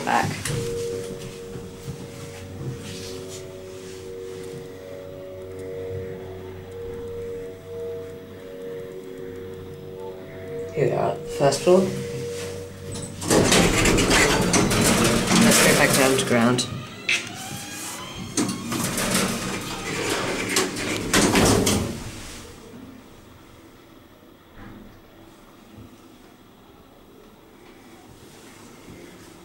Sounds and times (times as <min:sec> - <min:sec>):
Speech: 0:00.0 - 0:00.5, 0:10.7 - 0:12.0, 0:15.3 - 0:16.8.